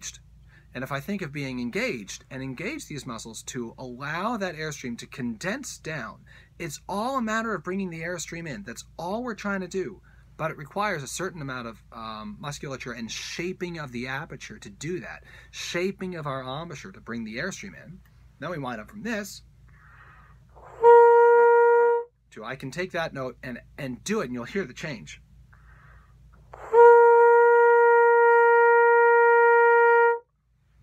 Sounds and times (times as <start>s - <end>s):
Brass instrument: 26.5s - 30.3s.